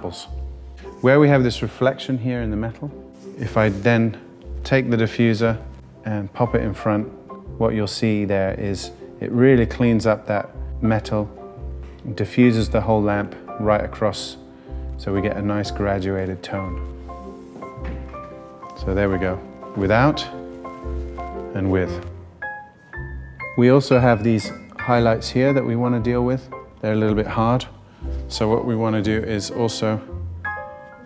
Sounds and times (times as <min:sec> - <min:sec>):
Speech: 0:00.0 - 0:00.3, 0:01.0 - 0:11.4, 0:12.0 - 0:14.4, 0:15.0 - 0:16.8, 0:18.8 - 0:20.4, 0:21.6 - 0:22.1, 0:23.6 - 0:27.7, 0:28.3 - 0:30.1
Music: 0:00.0 - 0:31.0.